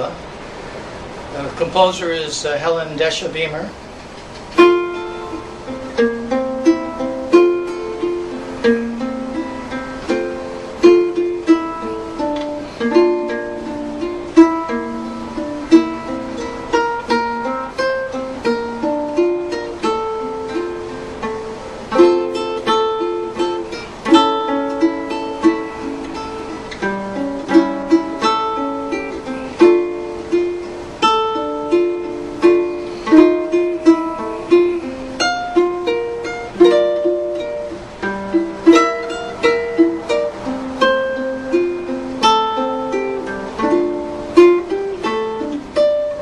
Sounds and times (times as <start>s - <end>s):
Ukulele: 3.8s - 46.2s.